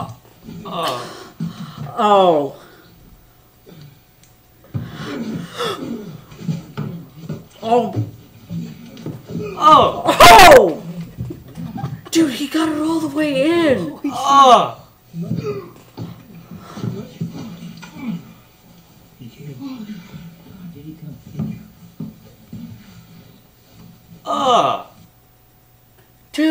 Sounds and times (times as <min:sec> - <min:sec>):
Speech: 0:12.1 - 0:14.8.